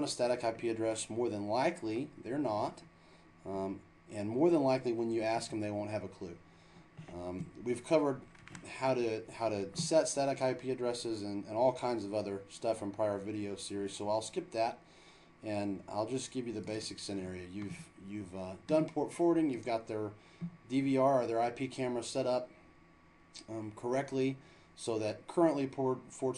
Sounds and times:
Speech: 0.0 - 2.9, 3.5 - 6.4, 7.1 - 14.8, 15.4 - 22.5, 23.4 - 26.3.

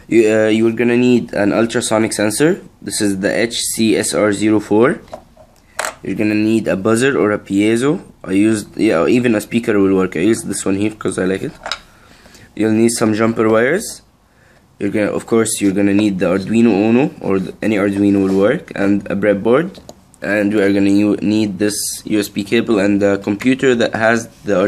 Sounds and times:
Inside, small room: 0.0 - 24.6
Speech: 0.1 - 5.1, 6.0 - 11.6, 12.6 - 14.1, 14.8 - 24.6.

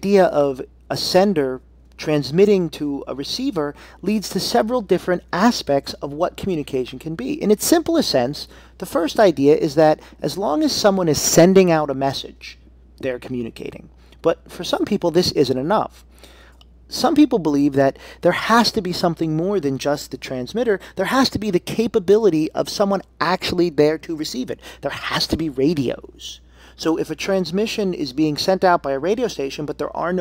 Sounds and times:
Speech: 0.0 - 16.0, 16.9 - 30.2.

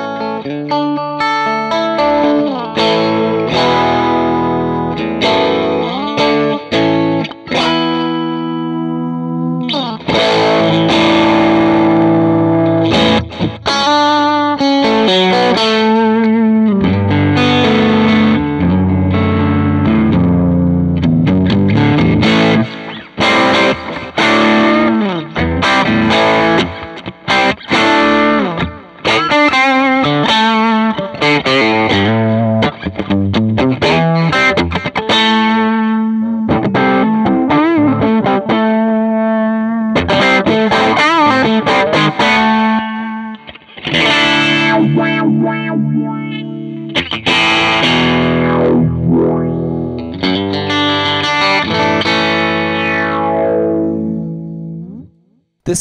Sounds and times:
Bass guitar: 0.0 - 55.0
Electric guitar: 0.0 - 55.8.

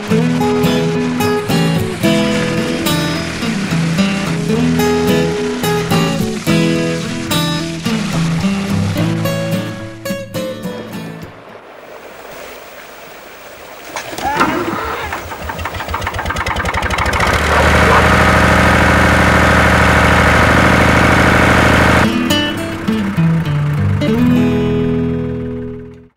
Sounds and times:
Music: 0.0 - 11.4, 22.0 - 26.1.

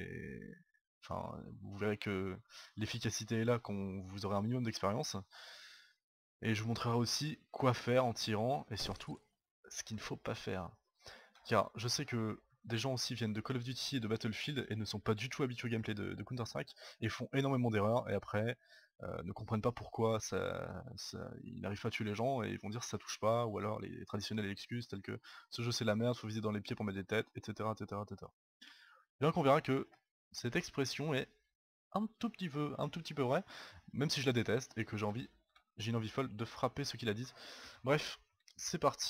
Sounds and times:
Speech: 0.0 - 5.4, 6.4 - 10.8, 11.4 - 28.4, 29.2 - 31.4, 32.0 - 39.0.

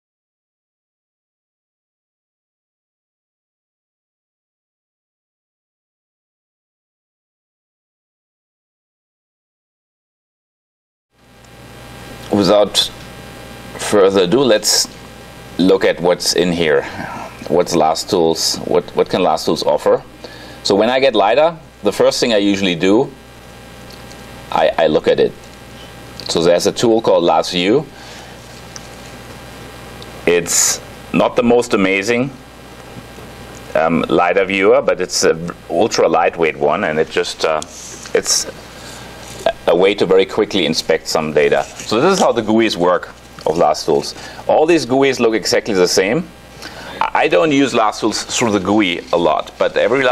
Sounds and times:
Speech: 12.3 - 13.0, 13.8 - 15.0, 15.6 - 23.2, 24.5 - 25.4, 26.2 - 27.9, 30.2 - 32.4, 33.7 - 38.6, 39.4 - 46.3, 47.0 - 50.1.

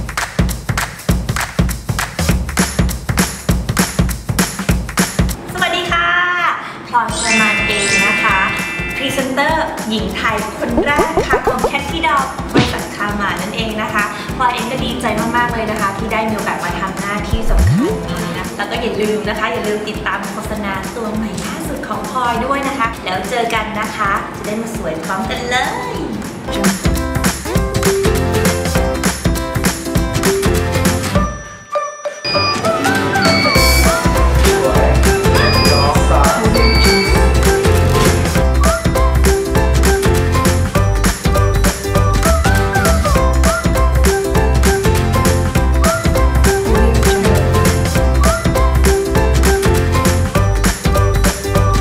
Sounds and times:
Music: 0.0 - 6.0, 7.1 - 51.8
Speech: 5.5 - 17.5, 18.1 - 26.2, 34.5 - 36.7.

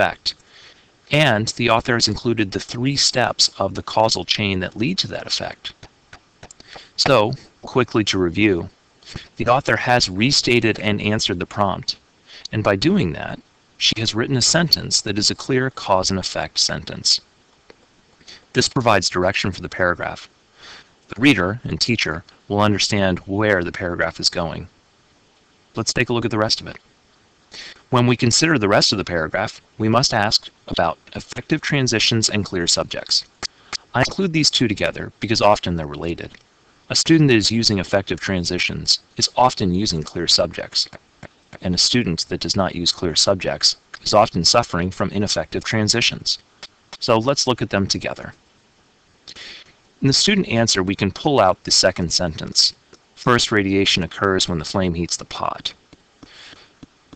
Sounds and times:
Speech: 0.0 - 0.4, 1.1 - 17.3, 18.3 - 20.3, 21.1 - 24.7, 25.8 - 26.8, 27.6 - 41.0, 41.6 - 48.4, 49.3 - 55.8.

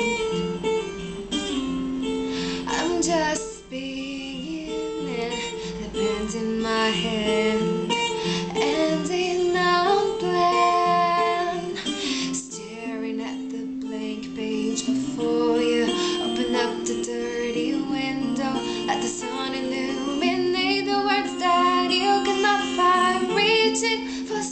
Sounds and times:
Music: 0.0 - 24.5
Female singing: 2.7 - 7.9, 8.5 - 24.5.

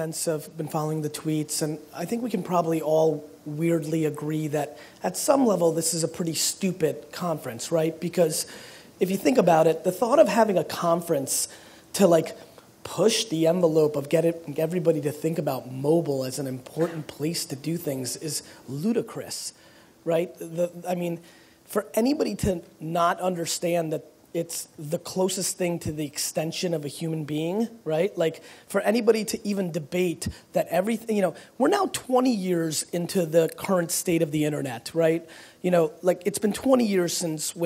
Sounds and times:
Speech: 0.0 - 37.6.

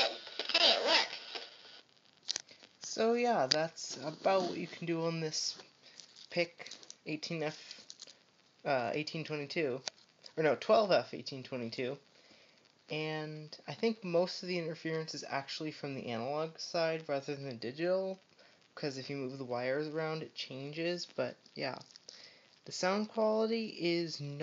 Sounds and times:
Speech: 2.8 - 5.6, 6.3 - 7.8, 8.6 - 12.0, 12.9 - 18.2, 18.8 - 21.9, 22.7 - 24.4.

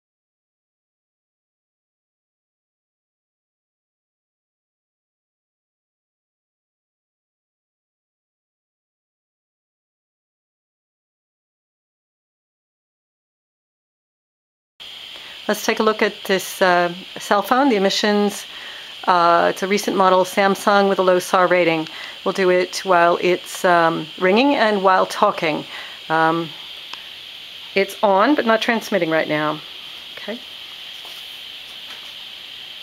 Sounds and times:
Speech: 15.5 - 26.6, 27.8 - 29.6, 30.2 - 30.4.

